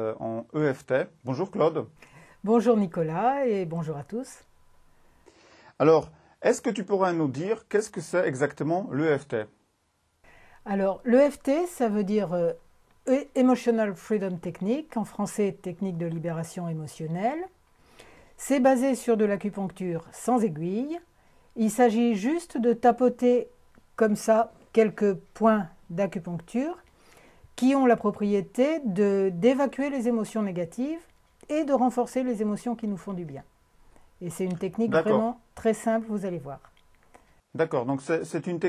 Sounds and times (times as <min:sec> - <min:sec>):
Speech: 0:00.0 - 0:04.4, 0:05.8 - 0:09.6, 0:10.7 - 0:17.5, 0:18.4 - 0:26.8, 0:27.6 - 0:33.5, 0:34.2 - 0:36.7, 0:37.6 - 0:38.6.